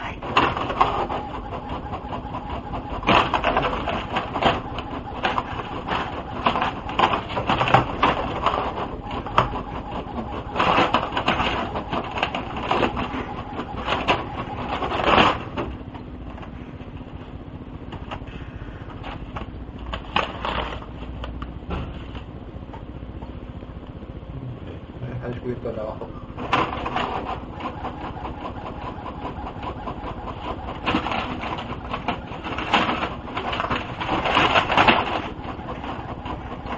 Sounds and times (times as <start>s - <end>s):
Printer: 0.0s - 22.3s, 25.4s - 36.7s
Speech: 24.4s - 26.2s.